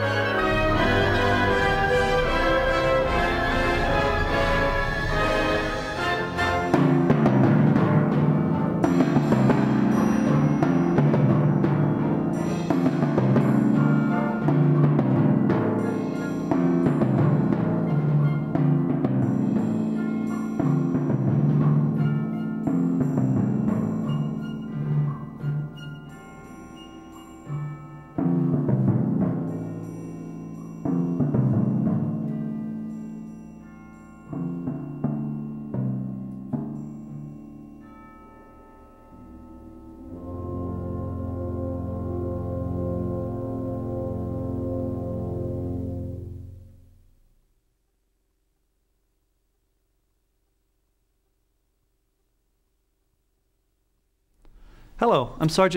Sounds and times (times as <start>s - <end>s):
Music: 0.0s - 47.5s, 54.4s - 55.7s.